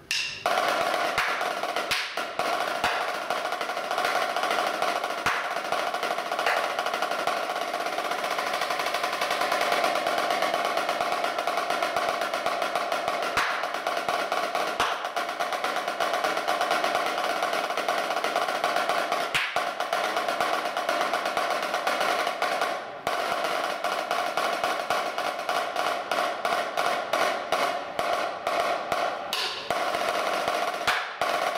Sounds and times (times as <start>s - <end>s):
Percussion: 0.0s - 31.5s.